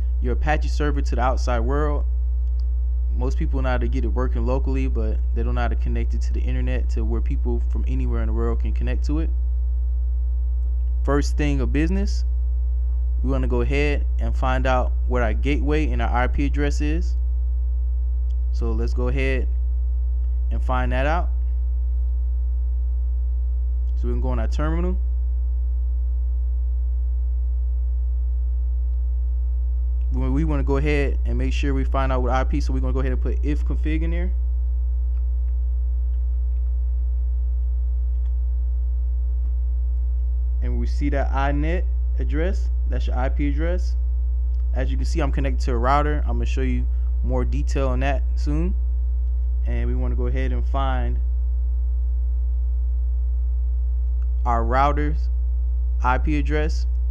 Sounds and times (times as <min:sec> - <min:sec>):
Speech: 0:00.2 - 0:02.1, 0:03.2 - 0:09.4, 0:11.0 - 0:12.3, 0:13.2 - 0:17.2, 0:18.6 - 0:19.5, 0:20.5 - 0:21.4, 0:24.0 - 0:25.0, 0:30.1 - 0:34.4, 0:40.6 - 0:44.0, 0:44.7 - 0:48.8, 0:49.7 - 0:51.2, 0:54.5 - 0:55.3, 0:56.0 - 0:56.9.